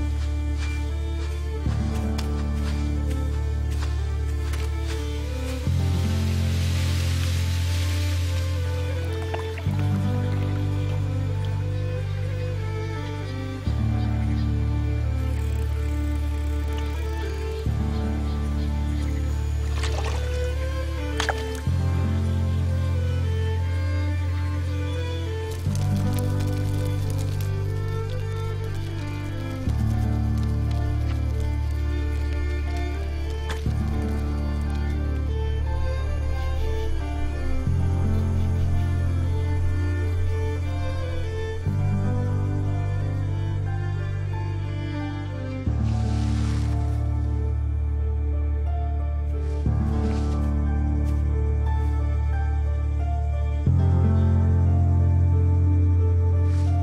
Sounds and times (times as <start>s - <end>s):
Music: 0.0s - 56.8s.